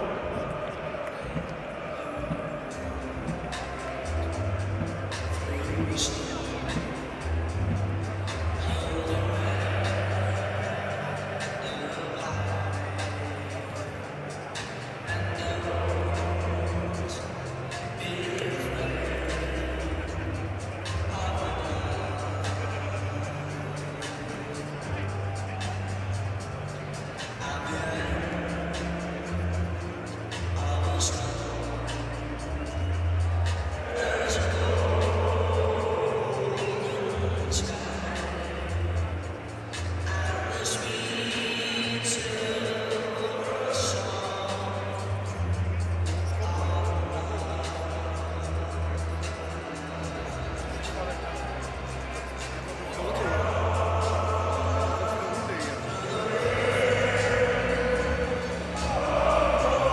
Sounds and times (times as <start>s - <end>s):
Music: 0.0s - 59.9s.